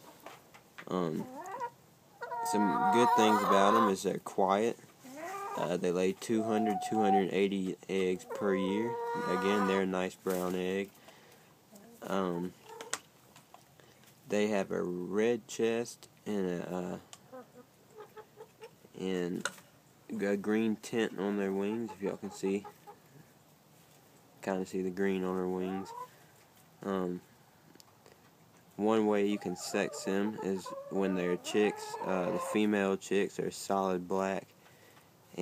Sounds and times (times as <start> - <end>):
Speech: 0.9 - 1.3, 5.6 - 10.9, 12.0 - 12.5, 19.0 - 19.5, 20.1 - 22.7, 24.4 - 25.9, 26.8 - 27.2, 28.8 - 34.5
Chicken, rooster: 1.2 - 4.0, 5.0 - 5.7, 6.4 - 7.4, 8.2 - 9.9, 25.6 - 26.1, 29.3 - 32.7.